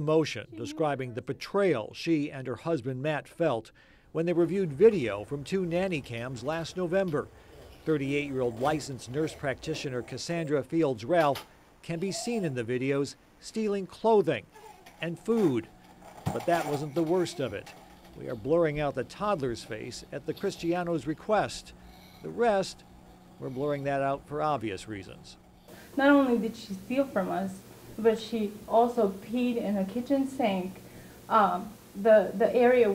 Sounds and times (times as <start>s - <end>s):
Female speech, woman speaking: 0.5s - 1.2s, 26.0s - 32.9s.